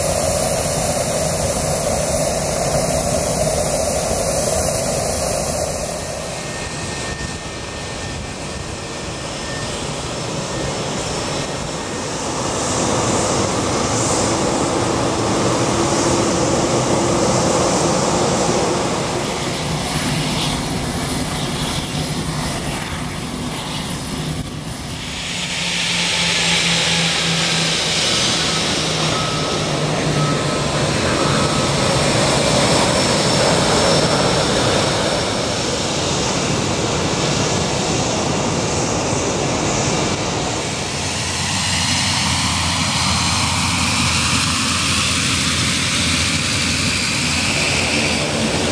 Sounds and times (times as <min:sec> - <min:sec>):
Aircraft engine: 0:00.0 - 0:48.7
Fixed-wing aircraft, airplane: 0:00.0 - 0:48.7
Outside, urban or manmade: 0:00.0 - 0:48.7.